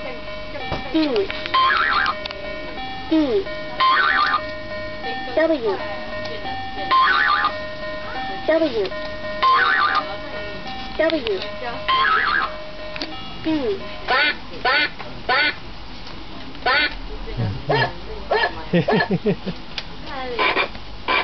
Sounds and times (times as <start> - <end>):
Speech: 0.0 - 1.5, 5.0 - 7.3, 8.0 - 12.3, 16.2 - 19.1
Music: 0.0 - 15.6.